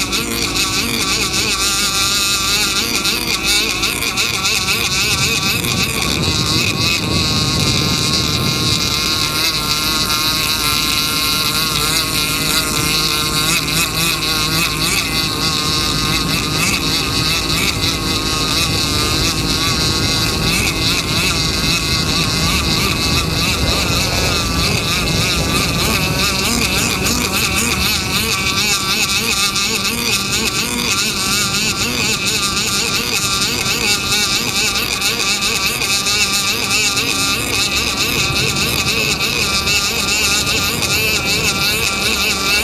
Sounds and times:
Motorboat, speedboat: 0.0s - 42.6s.

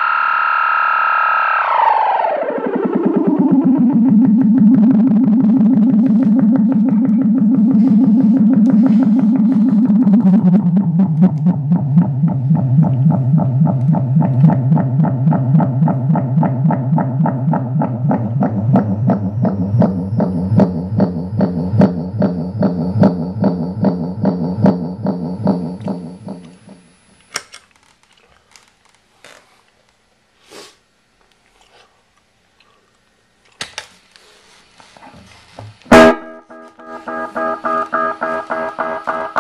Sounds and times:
Effects unit: 0.0s - 27.3s, 35.9s - 39.4s
Distortion: 0.0s - 28.0s, 34.6s - 39.4s
Music: 1.7s - 27.1s, 35.9s - 39.4s.

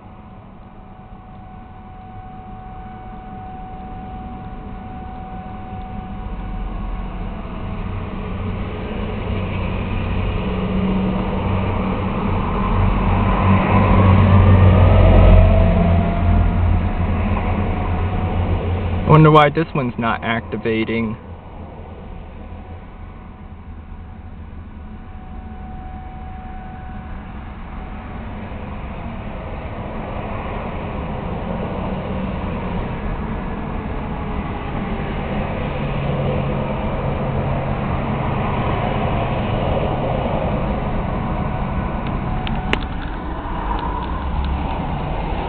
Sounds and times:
Truck: 0.0s - 45.4s.

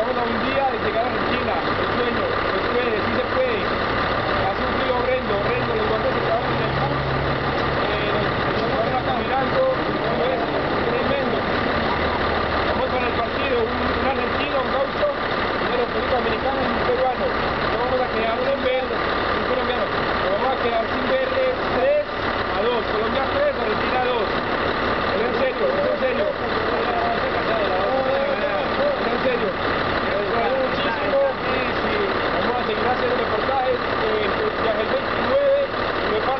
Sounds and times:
Speech: 0.0s - 3.7s, 4.4s - 7.2s, 7.8s - 11.6s, 12.6s - 24.4s, 25.0s - 36.3s
Bus: 0.0s - 36.3s.

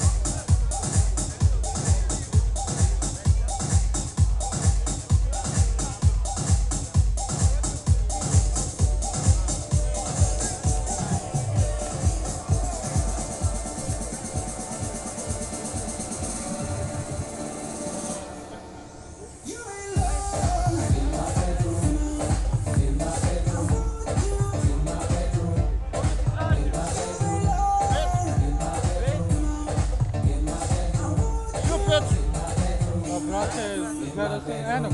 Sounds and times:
Speech: 0.0s - 14.6s, 25.6s - 29.7s, 31.5s - 32.2s, 33.0s - 34.9s
Music: 0.0s - 34.9s.

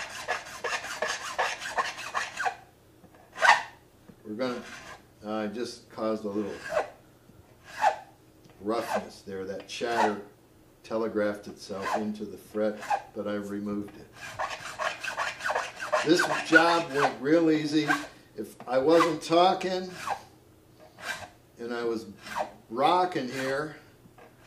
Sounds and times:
Filing (rasp): 0.0s - 2.6s, 4.6s - 5.0s, 6.3s - 6.9s, 7.6s - 8.1s, 8.8s - 9.0s, 9.9s - 10.2s, 11.8s - 12.0s, 12.7s - 13.1s, 14.1s - 17.2s, 17.8s - 18.1s, 19.9s - 21.4s, 22.1s - 22.6s, 23.2s - 24.4s
Rub: 0.0s - 2.6s, 4.6s - 5.0s, 6.3s - 6.9s, 7.7s - 8.0s, 14.2s - 17.1s, 20.0s - 21.3s, 22.2s - 22.5s.

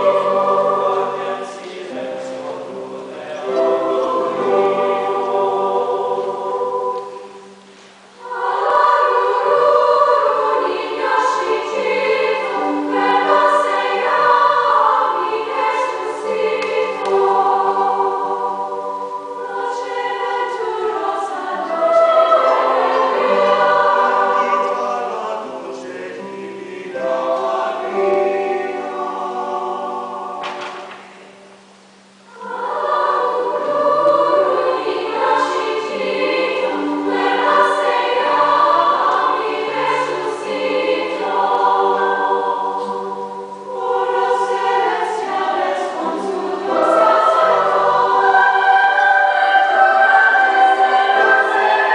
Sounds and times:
Lullaby: 0.0s - 30.4s, 31.6s - 51.9s.

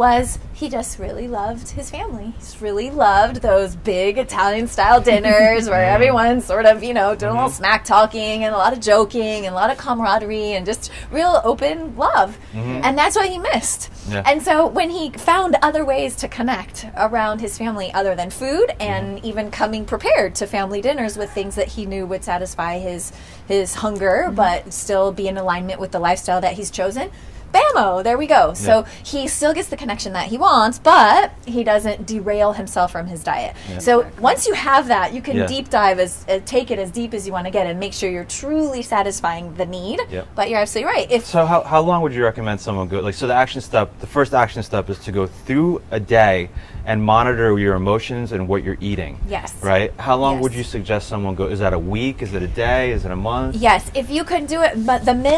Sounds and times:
Speech: 0.0s - 55.3s.

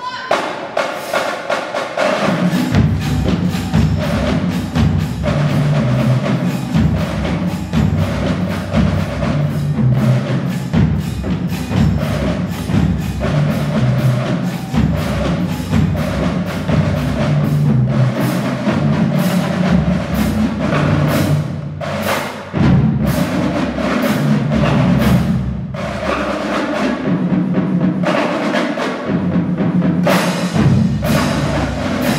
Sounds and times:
Music: 0.0s - 32.1s.

